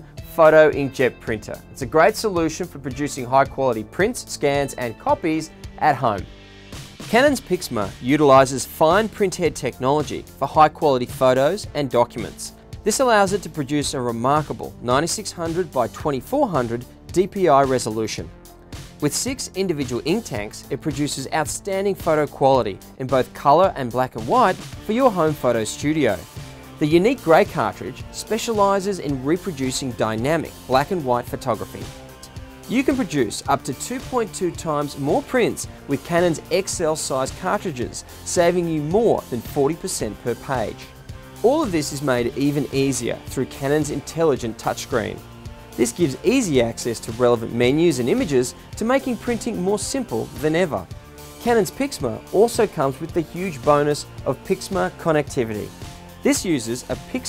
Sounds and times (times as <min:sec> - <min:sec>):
Music: 0:00.0 - 0:57.2
Speech: 0:00.2 - 0:06.3, 0:07.1 - 0:18.3, 0:19.0 - 0:45.2, 0:45.8 - 0:57.2.